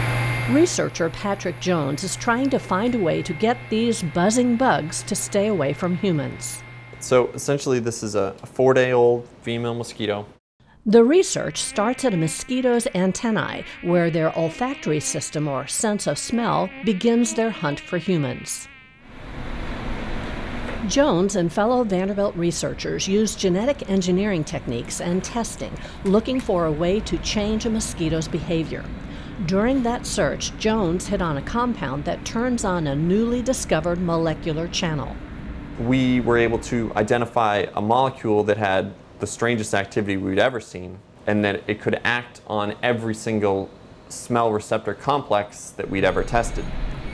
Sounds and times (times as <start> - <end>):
Fly, housefly: 0.3 - 7.2, 11.2 - 20.0
Mosquito: 0.4 - 7.1, 11.2 - 21.2.